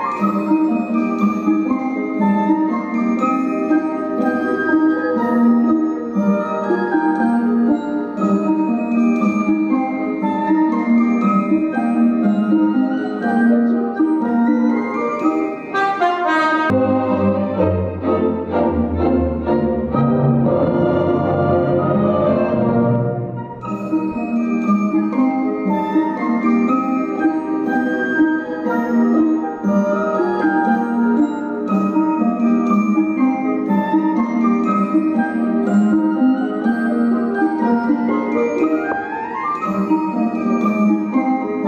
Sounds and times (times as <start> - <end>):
Glockenspiel: 0.0 - 41.6
Marimba, xylophone: 0.0 - 41.6.